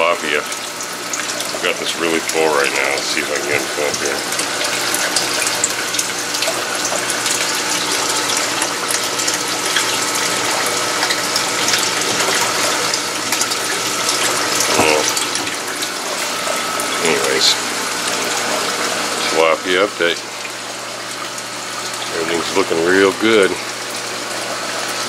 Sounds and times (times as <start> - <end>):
Pump (liquid): 0.0 - 25.0
Water: 0.0 - 25.0.